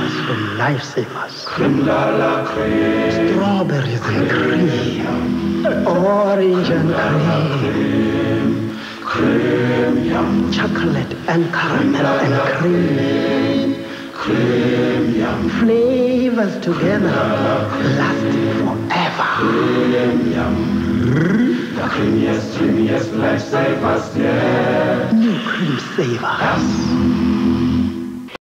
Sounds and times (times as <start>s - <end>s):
Speech: 0.0s - 1.7s, 3.2s - 7.6s, 10.5s - 13.0s, 15.6s - 17.2s, 17.8s - 19.5s, 25.1s - 26.9s
Music: 0.0s - 28.4s.